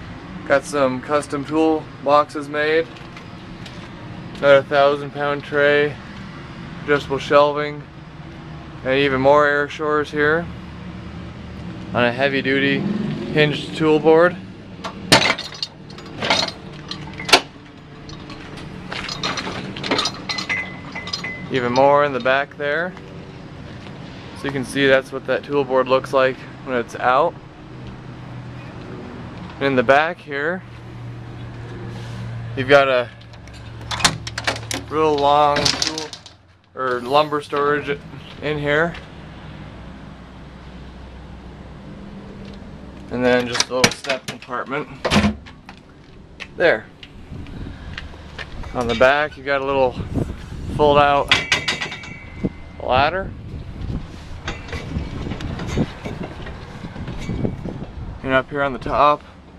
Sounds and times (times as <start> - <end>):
Truck: 0.0 - 59.5
Speech: 0.5 - 2.9, 4.4 - 6.0, 6.9 - 7.8, 8.8 - 10.5, 11.9 - 14.4, 21.5 - 23.0, 24.4 - 27.4, 29.6 - 30.6, 32.6 - 33.2, 34.9 - 36.2, 36.8 - 39.0, 43.1 - 45.0, 46.6 - 46.9, 48.7 - 50.1, 50.7 - 51.4, 52.8 - 53.3, 58.2 - 59.2.